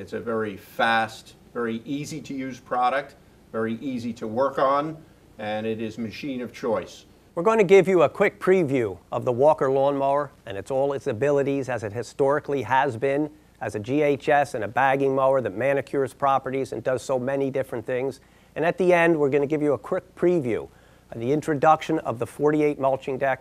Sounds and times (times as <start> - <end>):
Speech: 0.0 - 23.4.